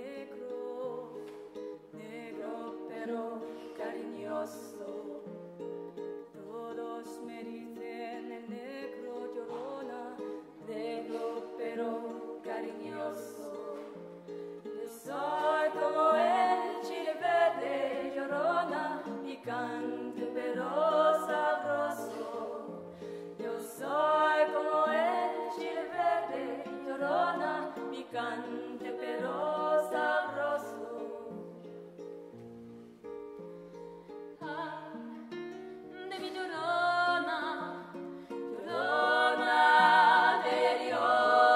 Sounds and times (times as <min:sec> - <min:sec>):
Music: 0:00.0 - 0:41.5.